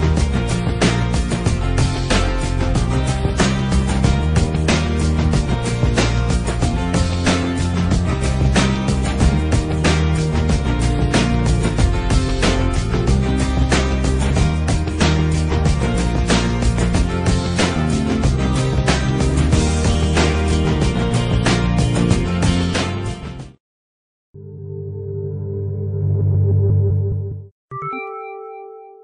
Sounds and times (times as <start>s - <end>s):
Music: 0.0s - 23.6s, 24.4s - 29.0s.